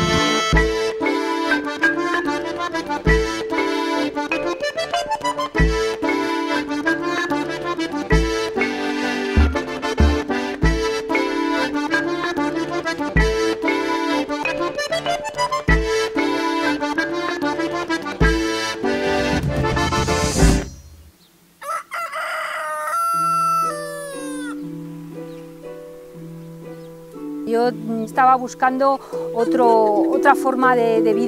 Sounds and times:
Music: 0.0s - 21.1s, 23.6s - 31.2s
Crowing, cock-a-doodle-doo: 21.6s - 24.6s.

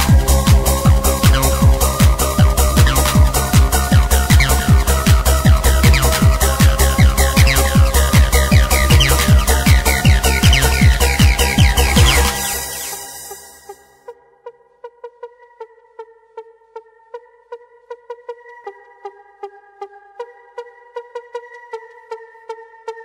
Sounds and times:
Electronic music: 0.0s - 14.4s.

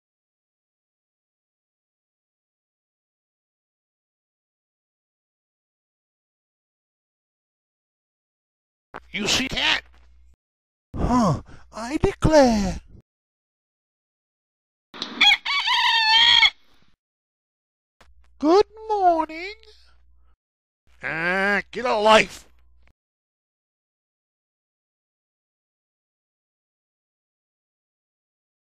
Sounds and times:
Speech: 9.1s - 9.9s, 11.0s - 13.0s, 18.4s - 19.9s, 21.0s - 22.5s.

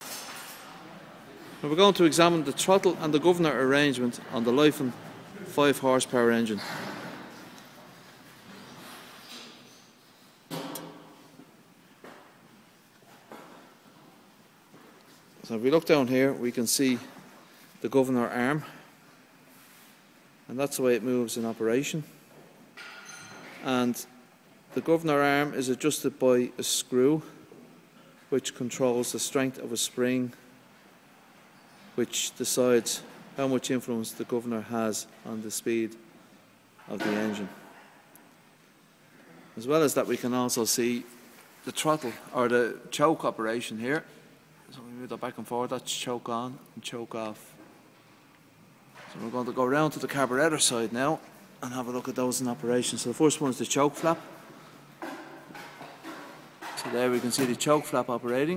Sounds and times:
Speech: 0.8s - 7.0s, 15.4s - 17.2s, 17.8s - 18.9s, 20.5s - 22.2s, 23.6s - 27.4s, 28.3s - 30.4s, 32.0s - 36.0s, 36.8s - 37.7s, 39.6s - 47.6s, 49.0s - 54.3s, 56.7s - 58.5s.

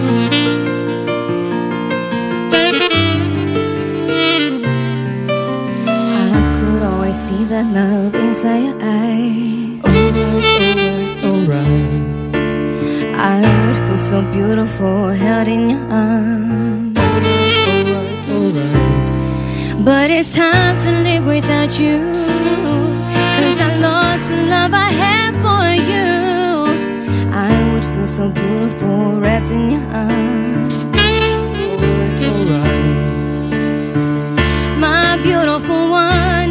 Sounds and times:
Music: 0.0s - 36.5s.

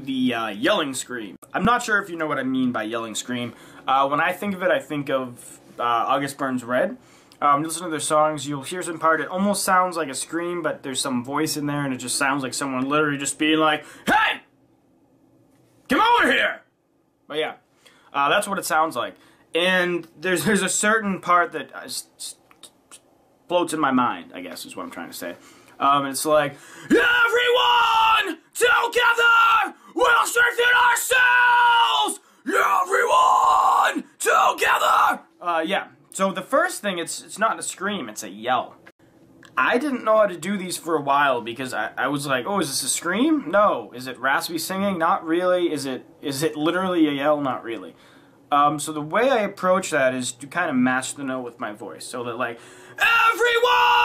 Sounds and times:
Speech: 0.0s - 14.5s, 15.9s - 16.7s, 17.3s - 22.8s, 23.5s - 38.8s, 39.6s - 54.0s
Yell: 14.1s - 14.4s, 15.9s - 16.6s, 26.8s - 35.3s, 53.0s - 54.0s.

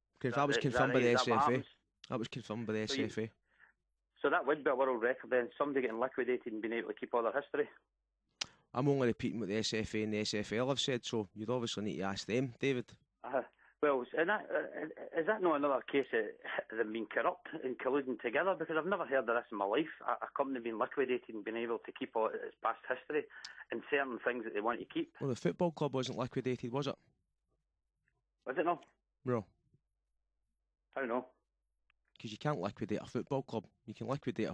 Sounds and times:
Speech: 0.2s - 3.3s, 4.2s - 7.8s, 8.7s - 27.0s, 28.5s - 29.5s, 31.0s - 31.3s, 32.2s - 34.5s.

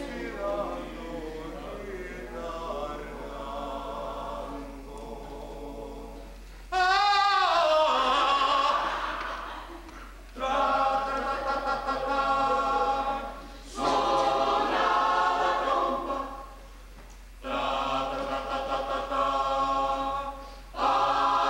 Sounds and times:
Choir: 0.0s - 16.7s, 17.4s - 21.5s.

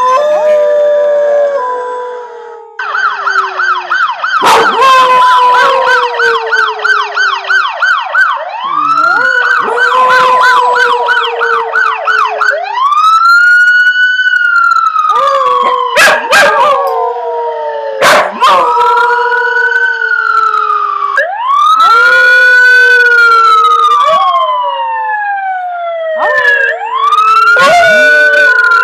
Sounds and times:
Howl: 0.0s - 2.8s, 4.4s - 7.8s, 8.7s - 12.7s, 15.1s - 25.6s, 26.2s - 28.8s.

